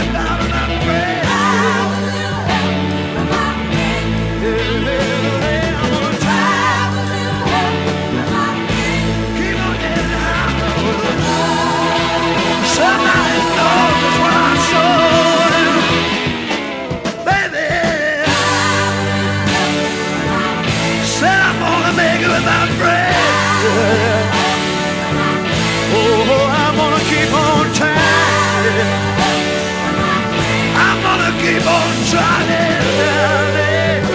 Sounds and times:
Music: 0:00.0 - 0:34.1.

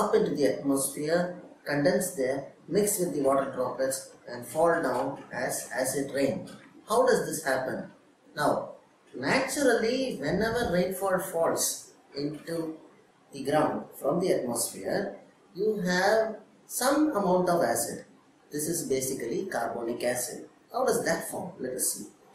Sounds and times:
Speech: 0:00.0 - 0:12.8, 0:13.4 - 0:22.1.

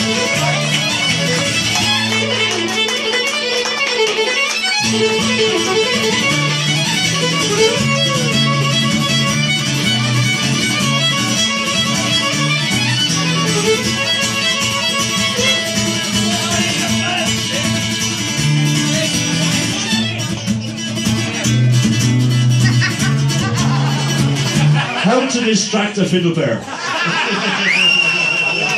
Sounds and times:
Violin, fiddle: 0:00.0 - 0:24.6
Speech: 0:16.1 - 0:17.9, 0:25.0 - 0:26.6.

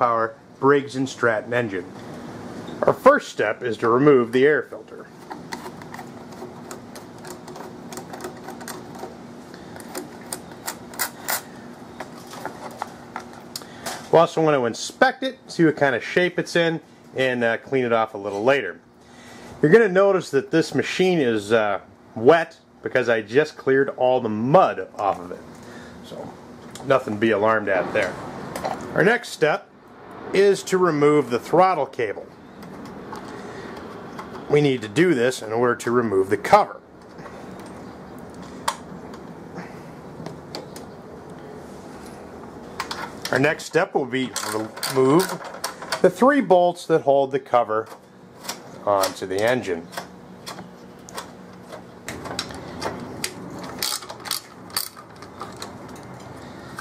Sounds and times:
Speech: 0:00.0 - 0:01.9, 0:02.8 - 0:05.1, 0:14.1 - 0:18.8, 0:19.6 - 0:28.2, 0:28.9 - 0:29.7, 0:30.3 - 0:32.3, 0:34.5 - 0:36.8, 0:43.3 - 0:45.4, 0:46.0 - 0:48.0, 0:48.8 - 0:49.9.

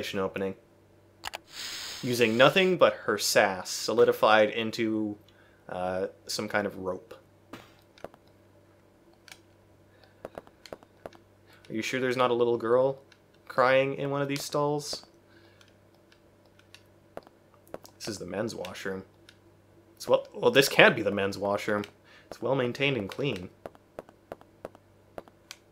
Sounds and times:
Speech: 0:00.0 - 0:00.6, 0:02.0 - 0:07.2, 0:11.7 - 0:15.1, 0:18.0 - 0:19.1, 0:20.0 - 0:23.6.

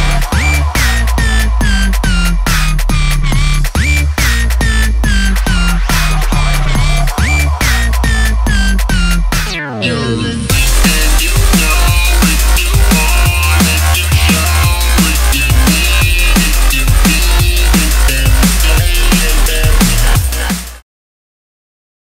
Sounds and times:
Dubstep: 0:00.0 - 0:20.8.

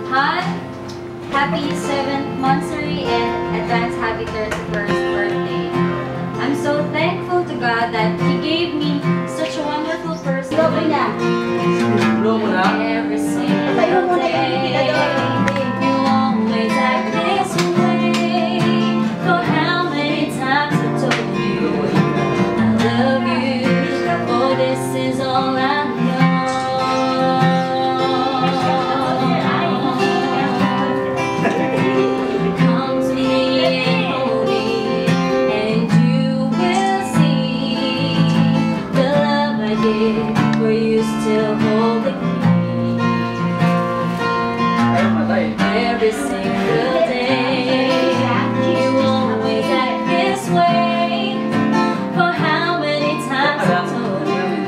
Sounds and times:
Flamenco: 0:00.0 - 0:54.6
Speech: 0:01.4 - 0:05.7, 0:06.4 - 0:11.2, 0:11.8 - 0:18.7, 0:44.8 - 0:51.2, 0:52.2 - 0:54.6.

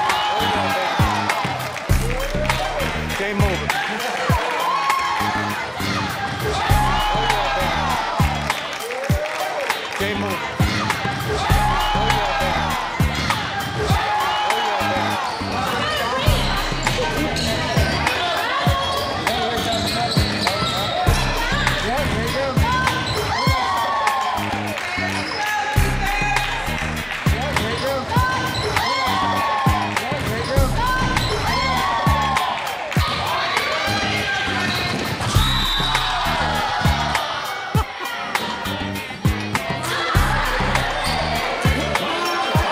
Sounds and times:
Music: 0:00.0 - 0:42.7
Speech: 0:02.0 - 0:04.6, 0:08.8 - 0:23.5, 0:30.0 - 0:35.2.

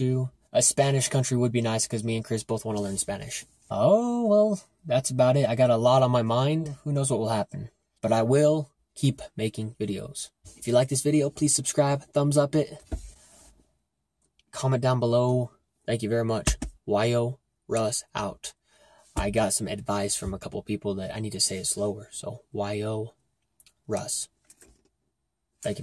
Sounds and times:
Speech: 0:00.0 - 0:12.8, 0:14.5 - 0:18.6, 0:19.2 - 0:23.2, 0:23.8 - 0:24.3.

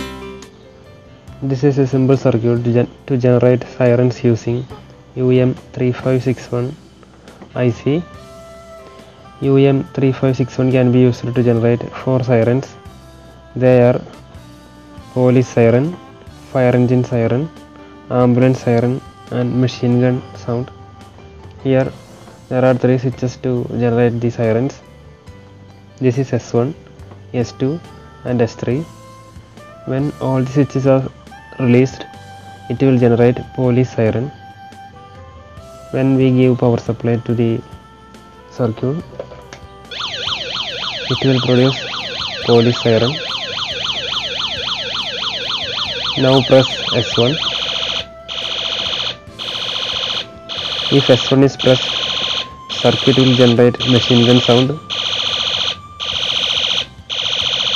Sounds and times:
Music: 0:00.0 - 0:57.7
Speech: 0:01.4 - 0:04.6, 0:05.2 - 0:06.8, 0:07.6 - 0:08.1, 0:09.4 - 0:12.8, 0:13.6 - 0:14.0, 0:15.2 - 0:15.9, 0:16.6 - 0:17.5, 0:18.1 - 0:20.7, 0:21.6 - 0:21.9, 0:22.5 - 0:24.8, 0:26.0 - 0:28.9, 0:29.9 - 0:32.1, 0:32.7 - 0:34.3, 0:35.9 - 0:37.6, 0:38.5 - 0:39.0, 0:41.1 - 0:41.8, 0:42.5 - 0:43.2, 0:46.2 - 0:47.4, 0:50.9 - 0:51.8, 0:52.8 - 0:54.8.

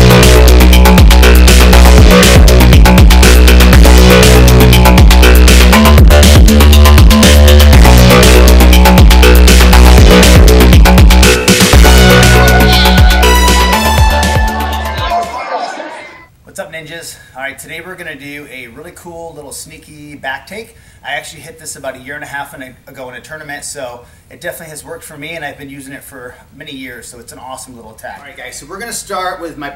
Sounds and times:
Dubstep: 0:00.0 - 0:16.2.

